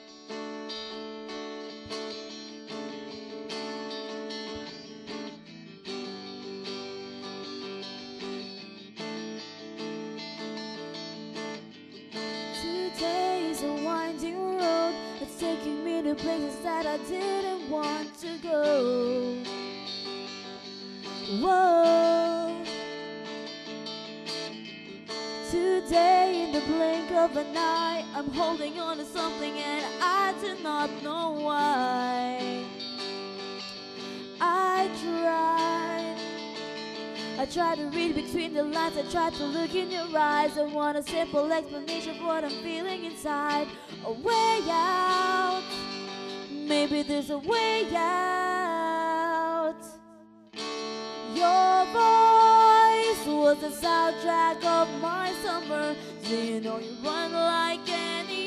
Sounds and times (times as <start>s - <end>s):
Music: 0.0s - 58.4s.